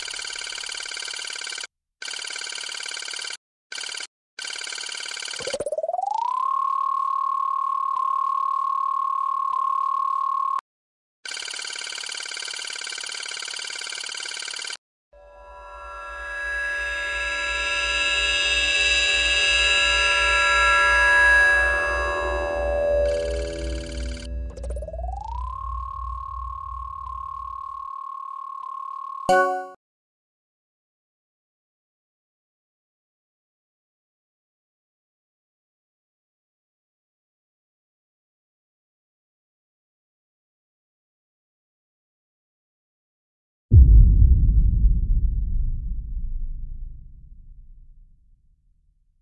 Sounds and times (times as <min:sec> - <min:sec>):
Sound effect: 0:00.0 - 0:10.6, 0:11.3 - 0:29.8, 0:43.7 - 0:48.2
Music: 0:29.3 - 0:29.8.